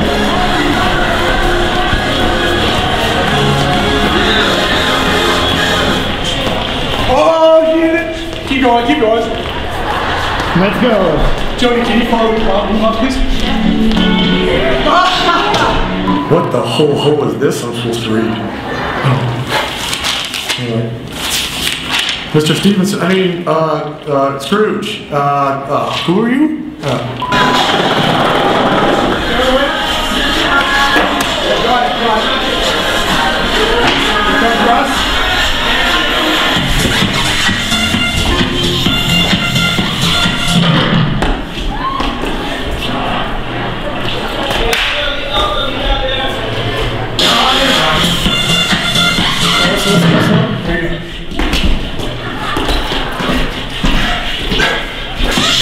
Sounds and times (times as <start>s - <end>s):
Music: 0.0s - 7.6s, 12.7s - 17.1s, 27.3s - 41.4s, 47.2s - 50.7s
Inside, large room or hall: 0.0s - 55.6s
Speech: 10.6s - 13.6s, 22.4s - 27.2s.